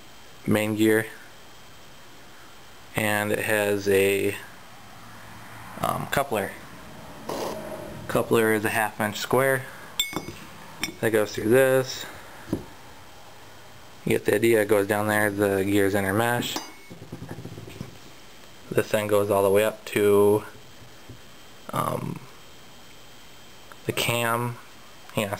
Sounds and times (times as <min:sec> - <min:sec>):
Speech: 0:00.4 - 0:01.2, 0:02.9 - 0:04.5, 0:05.8 - 0:06.6, 0:08.1 - 0:09.7, 0:11.0 - 0:12.2, 0:14.0 - 0:16.6, 0:18.7 - 0:20.6, 0:21.7 - 0:22.3, 0:23.8 - 0:25.3.